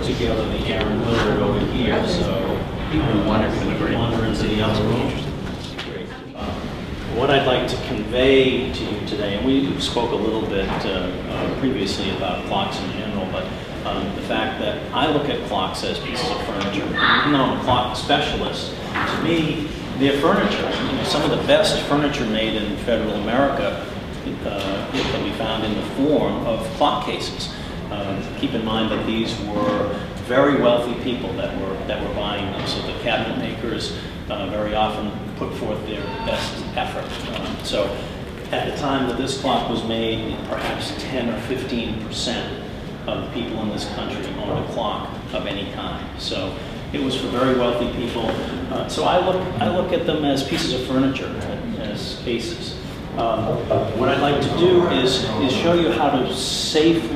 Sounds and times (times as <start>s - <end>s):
Speech: 0.0s - 57.1s.